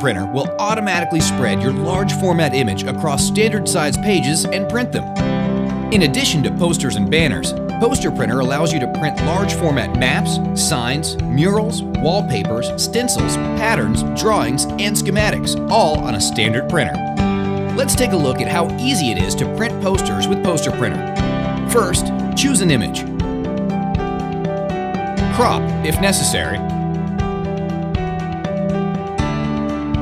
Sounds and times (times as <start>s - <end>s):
Speech: 0.0s - 5.1s, 5.9s - 17.0s, 17.8s - 21.1s, 21.7s - 23.1s, 25.3s - 26.6s
Music: 0.0s - 30.0s.